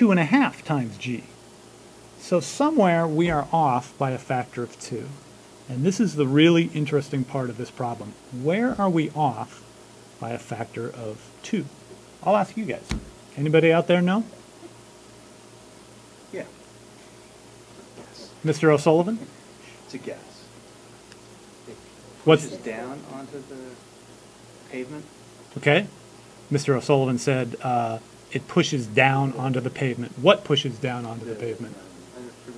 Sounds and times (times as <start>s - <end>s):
Speech: 0.0s - 1.3s, 2.2s - 9.6s, 10.2s - 14.3s, 18.0s - 19.3s, 21.7s - 23.8s, 24.7s - 25.9s, 26.5s - 32.5s
Inside, small room: 0.0s - 32.5s.